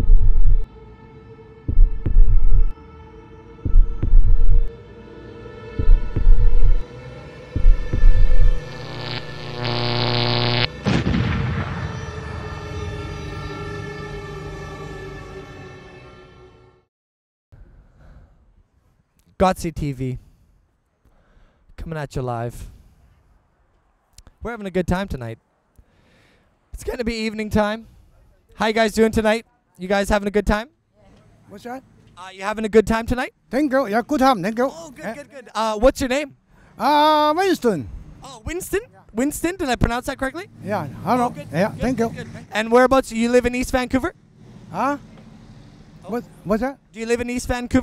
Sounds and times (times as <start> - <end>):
Speech: 19.4 - 20.2, 21.8 - 22.7, 24.4 - 25.4, 26.8 - 44.2, 46.0 - 47.8.